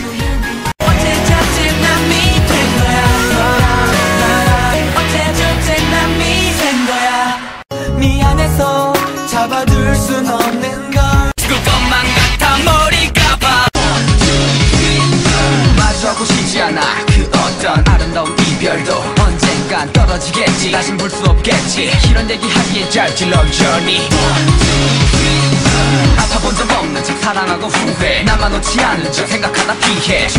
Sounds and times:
Male singing: 0.0s - 30.3s
Music: 0.0s - 30.3s.

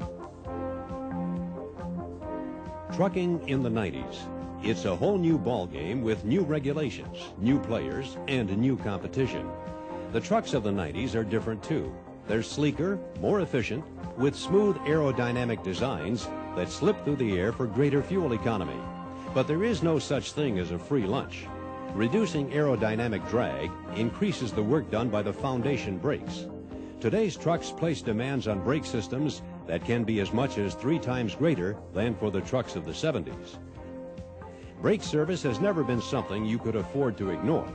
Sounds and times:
Music: 0.0s - 37.7s
Speech: 2.9s - 9.5s, 10.2s - 18.8s, 19.4s - 26.4s, 27.0s - 33.6s, 34.8s - 37.7s.

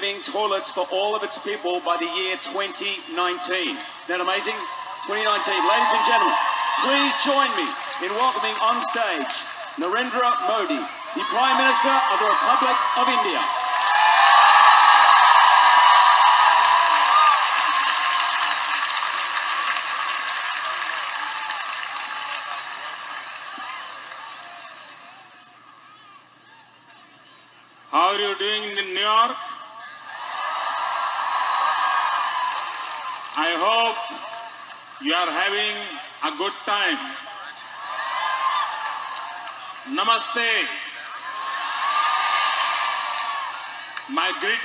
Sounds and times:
Male speech, man speaking: 0.0s - 13.5s, 27.9s - 30.0s, 33.4s - 34.2s, 35.0s - 37.6s, 39.9s - 41.3s, 44.1s - 44.6s
Narration, monologue: 0.0s - 13.6s, 35.0s - 37.3s.

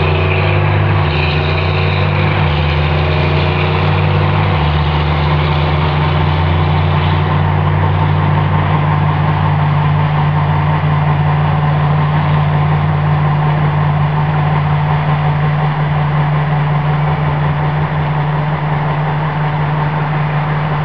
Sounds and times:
Heavy engine (low frequency): 0.0s - 20.8s
Outside, rural or natural: 0.0s - 20.8s
Truck: 0.0s - 20.8s.

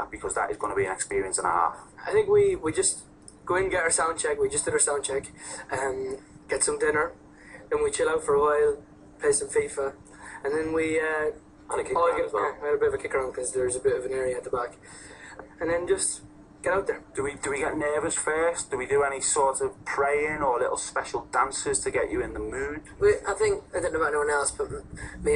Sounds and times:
Speech: 0.0s - 25.3s.

